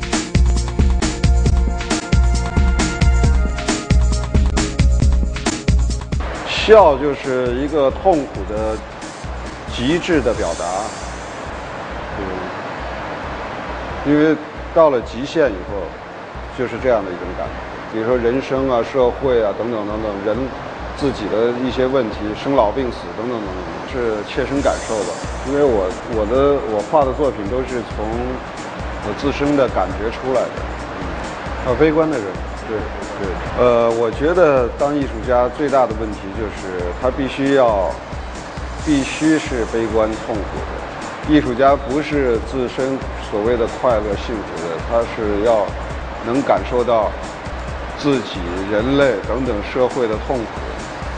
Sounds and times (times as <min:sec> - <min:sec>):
Music: 0:00.0 - 0:51.1
Speech: 0:06.4 - 0:08.8, 0:09.7 - 0:10.9, 0:12.2 - 0:12.6, 0:14.0 - 0:16.0, 0:16.6 - 0:28.4, 0:29.0 - 0:30.6, 0:31.6 - 0:38.0, 0:38.8 - 0:47.2, 0:48.0 - 0:50.8.